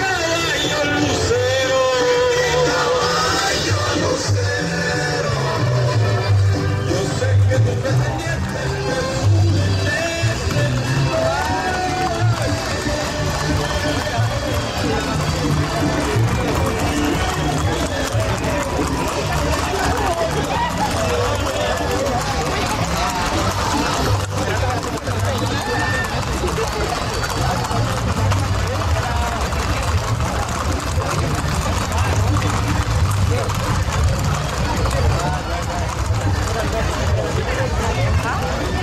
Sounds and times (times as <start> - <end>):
Clip-clop: 0.0 - 38.8
Music: 0.0 - 38.8.